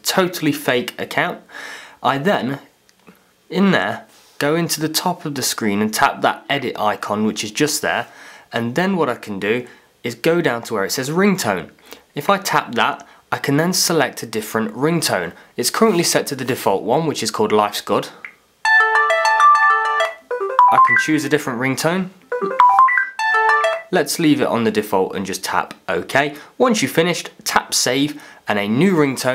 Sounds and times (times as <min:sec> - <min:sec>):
Ringtone: 0:18.6 - 0:21.2, 0:22.3 - 0:23.9.